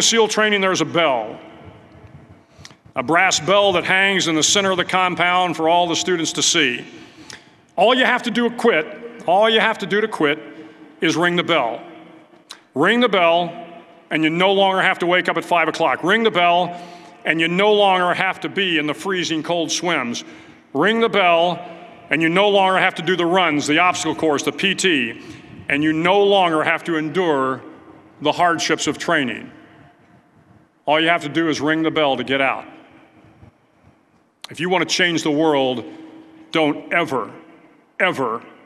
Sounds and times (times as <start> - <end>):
Speech: 0.0 - 1.4, 3.0 - 6.9, 7.8 - 10.4, 11.0 - 11.9, 12.6 - 27.6, 28.2 - 29.5, 30.9 - 32.7, 34.5 - 35.8, 36.5 - 37.4, 38.0 - 38.5.